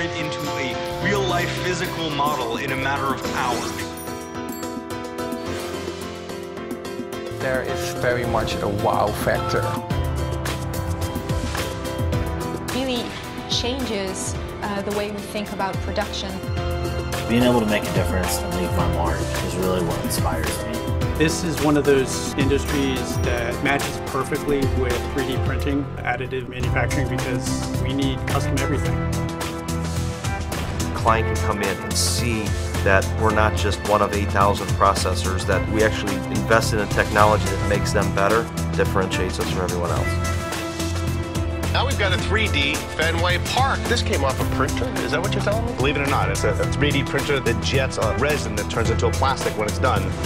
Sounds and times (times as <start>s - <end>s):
Speech: 0.0s - 3.9s, 7.4s - 9.8s, 12.8s - 16.4s, 17.3s - 28.9s, 31.0s - 40.2s, 41.8s - 50.2s
Music: 0.0s - 50.2s.